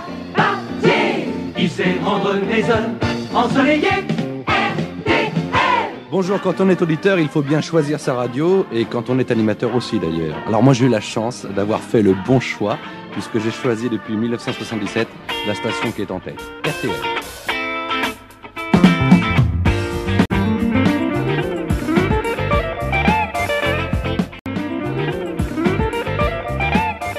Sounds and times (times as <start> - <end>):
Music: 0.0 - 27.1
Speech: 6.1 - 17.1.